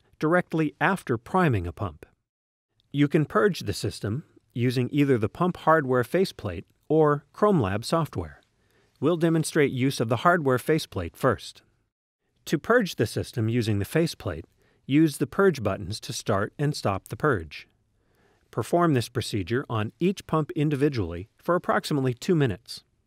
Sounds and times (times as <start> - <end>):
Speech: 0.2 - 2.2, 2.9 - 8.4, 9.0 - 11.6, 12.5 - 17.7, 18.5 - 22.9.